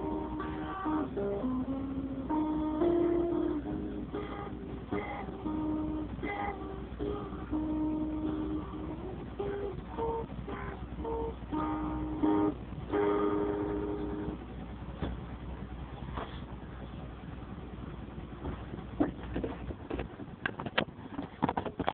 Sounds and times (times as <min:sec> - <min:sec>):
Acoustic guitar: 0:00.0 - 0:14.3
Strum: 0:00.0 - 0:21.8.